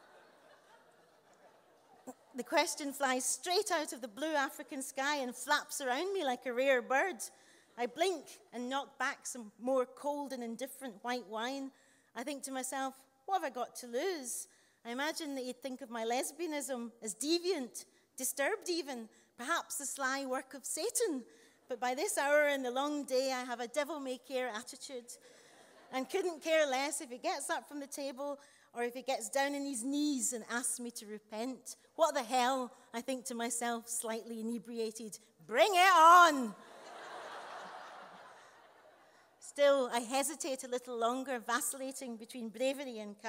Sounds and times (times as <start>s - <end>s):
Speech: 2.1s - 25.2s, 25.9s - 36.6s, 39.4s - 43.2s.